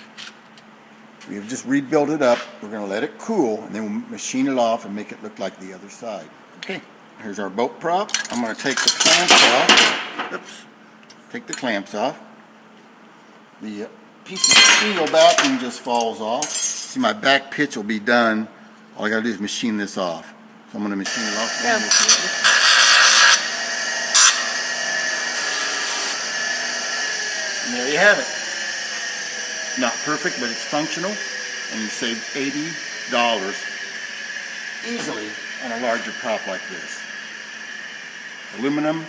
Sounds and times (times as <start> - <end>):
Speech: 1.2 - 9.7, 11.3 - 12.3, 13.6 - 22.3, 29.8 - 33.6, 34.8 - 37.0, 38.6 - 39.0.